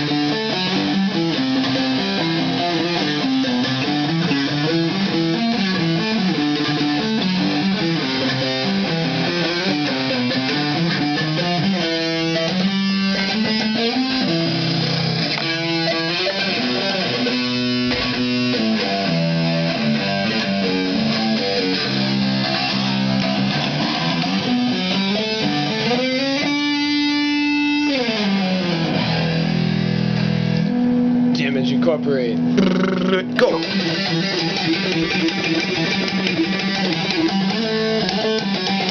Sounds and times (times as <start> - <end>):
Bass guitar: 0.0 - 38.9.